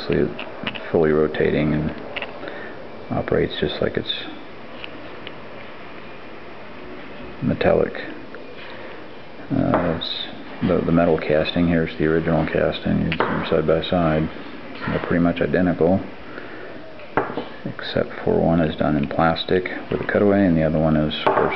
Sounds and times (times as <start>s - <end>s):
Speech: 0.0s - 2.0s, 3.1s - 4.4s, 7.4s - 8.2s, 9.5s - 16.1s, 17.0s - 21.5s.